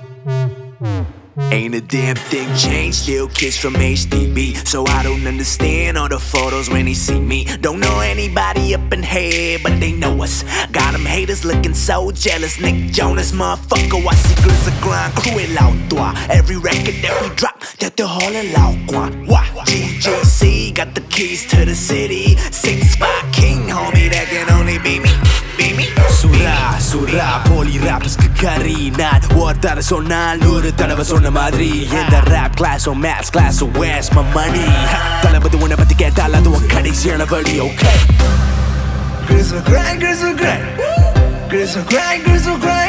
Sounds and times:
Music: 0.0 - 42.8.

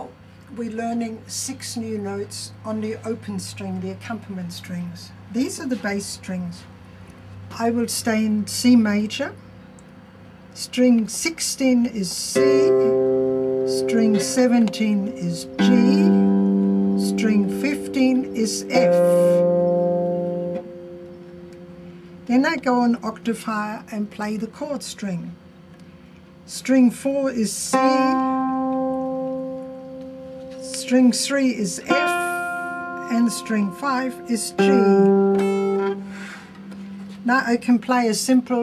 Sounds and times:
Speech: 0.0 - 6.7, 7.5 - 9.4, 10.6 - 13.0, 13.7 - 16.3, 17.0 - 19.4, 22.3 - 25.4, 26.5 - 28.4, 30.6 - 32.4, 33.1 - 35.1, 37.2 - 38.6
Plucked string instrument: 12.3 - 24.3, 27.6 - 37.7.

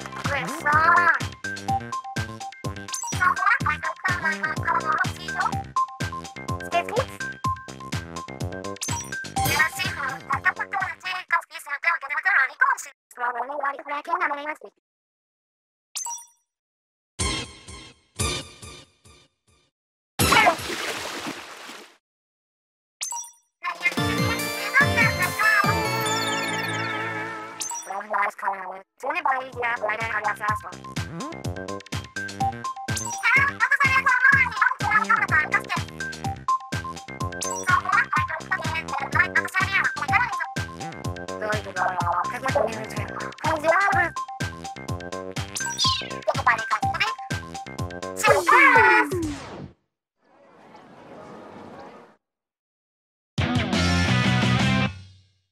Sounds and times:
Music: 0.0 - 11.0, 17.2 - 20.4, 23.8 - 27.7, 29.4 - 48.4, 53.4 - 55.5
Speech: 0.2 - 1.2, 3.2 - 5.6, 6.6 - 7.1, 9.5 - 14.8, 23.6 - 25.7, 27.9 - 31.4, 33.2 - 35.9, 37.7 - 40.4, 41.4 - 44.2, 46.2 - 47.2, 48.2 - 49.4.

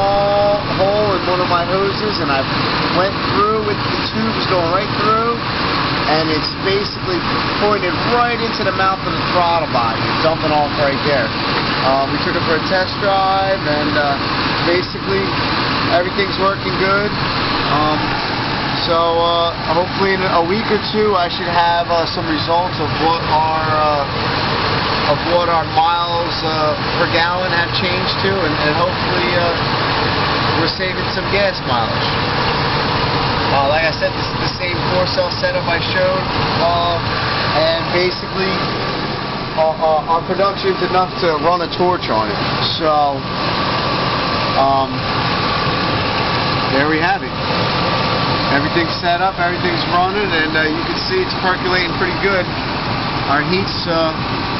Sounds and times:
Speech: 0.0 - 18.2, 18.8 - 24.1, 25.0 - 29.6, 30.5 - 32.2, 33.5 - 38.7, 39.6 - 43.3, 44.5 - 45.1, 46.7 - 47.4, 48.5 - 52.5, 53.3 - 54.3
Truck: 0.0 - 54.5.

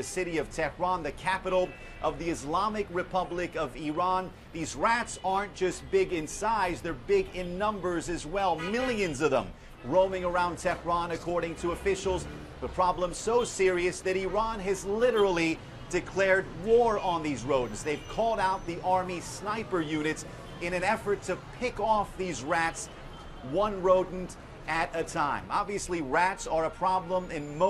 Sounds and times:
Speech: 0.0 - 27.7.

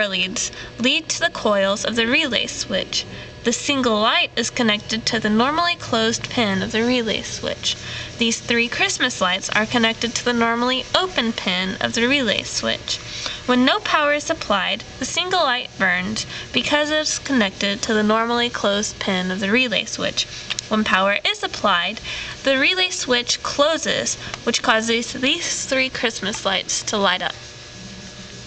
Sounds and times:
Speech: 0.0 - 27.4.

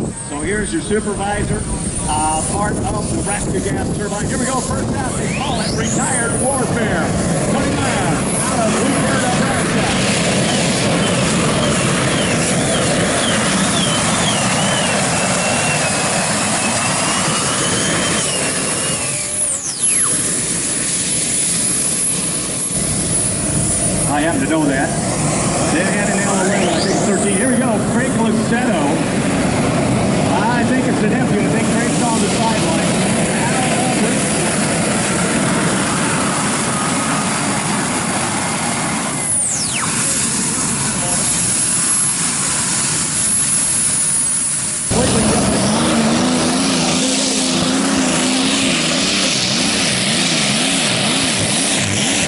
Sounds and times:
Speech: 0.2 - 10.7, 24.1 - 25.0, 25.7 - 29.1, 30.2 - 34.4, 40.0 - 41.4, 44.9 - 47.6.

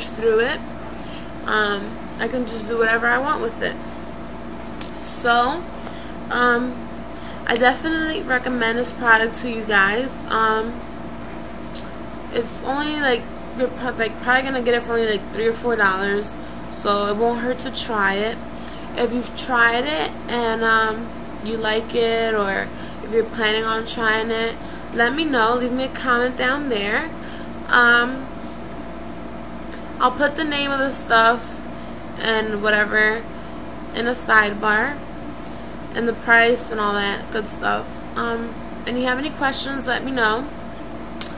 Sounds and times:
Speech: 0.0 - 0.6, 1.5 - 3.8, 5.0 - 5.7, 6.3 - 6.8, 7.5 - 10.8, 12.3 - 18.4, 19.0 - 28.3, 30.0 - 31.6, 32.2 - 33.3, 34.0 - 35.0, 36.0 - 40.5
Inside, small room: 0.0 - 41.3.

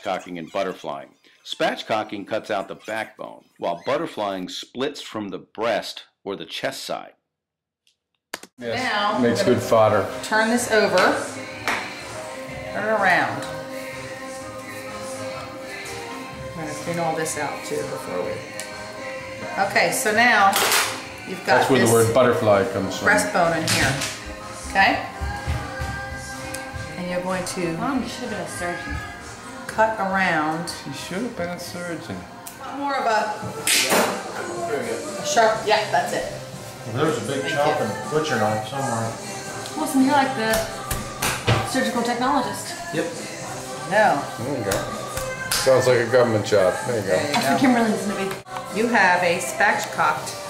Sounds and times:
Music: 8.6 - 50.5.

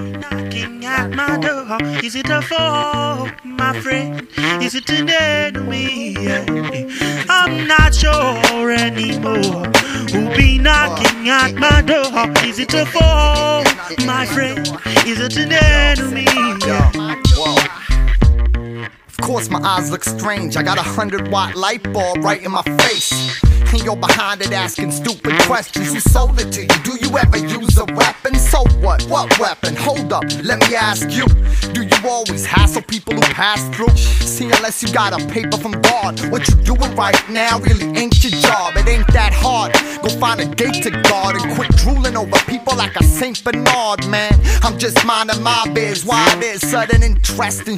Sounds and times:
Music: 0.0 - 47.7.

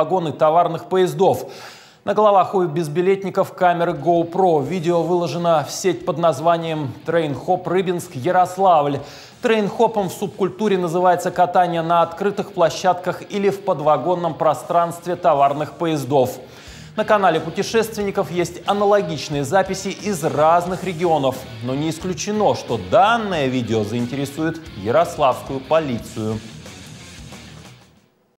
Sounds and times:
Speech: 0.0 - 26.5
Music: 0.0 - 28.3.

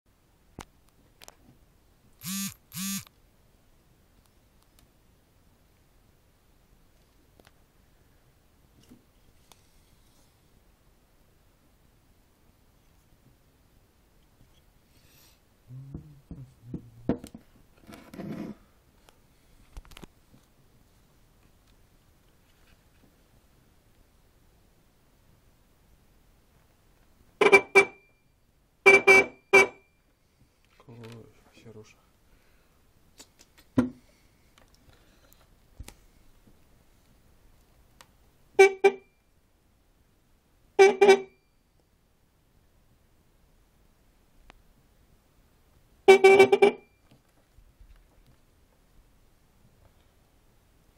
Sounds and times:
Inside, small room: 0.1 - 50.9
Vehicle horn, car horn, honking: 27.4 - 28.1, 28.9 - 29.9, 38.6 - 39.2, 40.8 - 41.5, 46.1 - 47.0
Speech: 30.8 - 32.1.

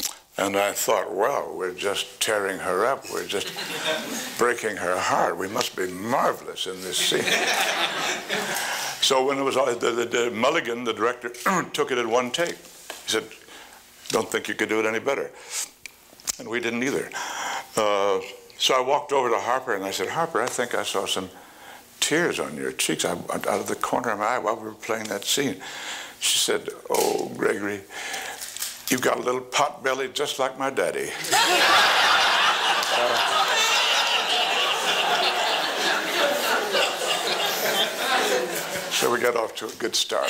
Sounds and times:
Speech: 0.4 - 3.6, 4.3 - 7.4, 9.0 - 13.4, 14.1 - 15.4, 16.4 - 17.2, 17.8 - 21.4, 22.0 - 25.6, 26.2 - 27.9, 28.9 - 31.2, 37.8 - 40.2.

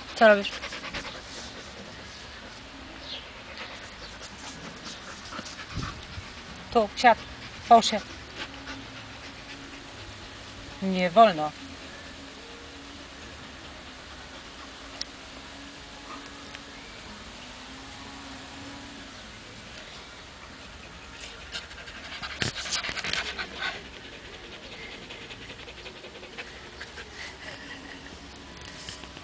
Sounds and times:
Pant: 20.8 - 28.1.

